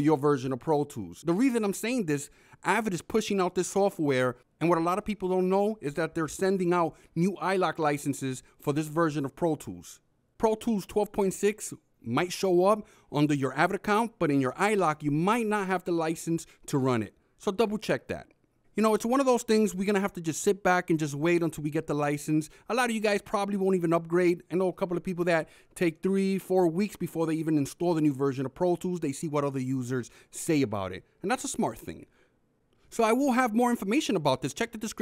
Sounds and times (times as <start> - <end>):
Speech: 0.0 - 32.1, 32.9 - 35.0.